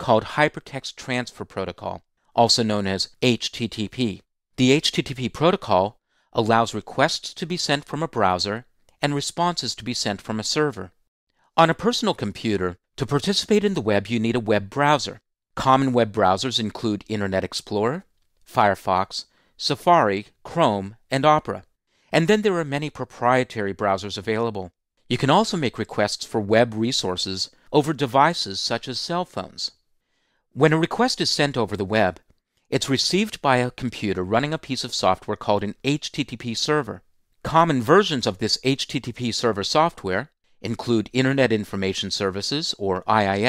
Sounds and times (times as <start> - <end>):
Speech: 0.0 - 11.0, 11.6 - 29.8, 30.6 - 43.4.